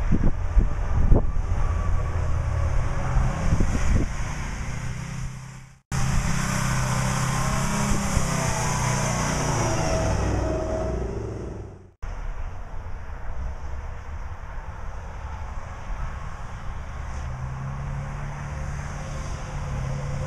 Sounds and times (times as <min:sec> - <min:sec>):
Truck: 0:00.0 - 0:20.2.